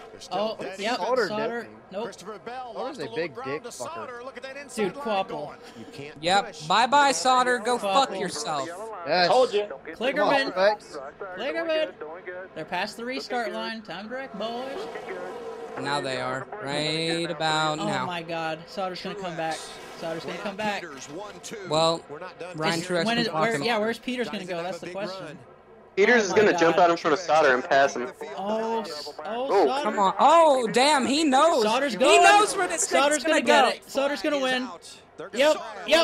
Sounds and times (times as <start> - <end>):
Speech: 0.0 - 12.0, 15.8 - 25.4, 26.0 - 36.0
Vehicle: 8.6 - 26.8.